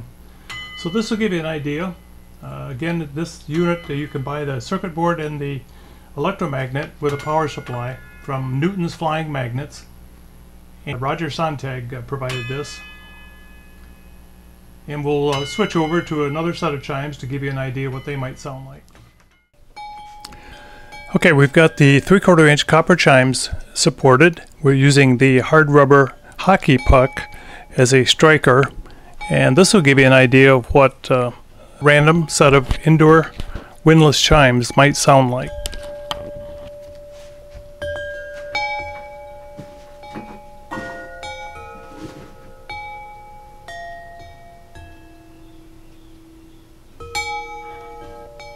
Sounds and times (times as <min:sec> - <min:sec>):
Wind chime: 0:00.5 - 0:01.4, 0:07.0 - 0:09.2, 0:12.3 - 0:14.2, 0:15.3 - 0:17.2, 0:19.8 - 0:22.0, 0:26.7 - 0:27.8, 0:33.9 - 0:48.5
Speech: 0:00.8 - 0:09.9, 0:10.9 - 0:12.8, 0:14.9 - 0:18.8, 0:21.1 - 0:35.6.